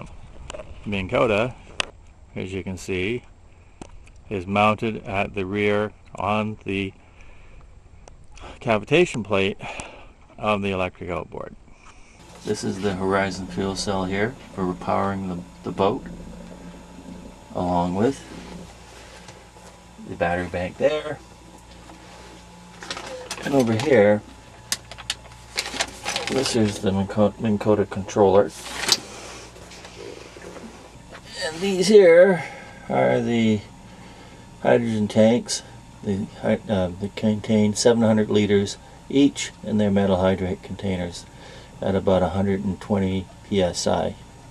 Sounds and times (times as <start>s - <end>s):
Speech: 0.8s - 1.6s, 2.4s - 3.2s, 4.3s - 7.0s, 8.4s - 9.7s, 10.4s - 11.6s, 12.4s - 16.1s, 17.5s - 18.3s, 20.0s - 21.2s, 23.4s - 24.3s, 26.2s - 28.6s, 31.3s - 33.7s, 34.6s - 44.2s.